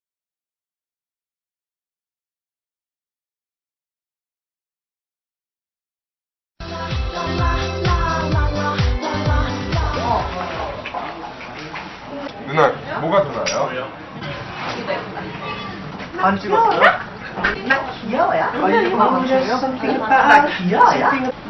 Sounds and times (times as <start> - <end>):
Music: 6.6 - 10.8.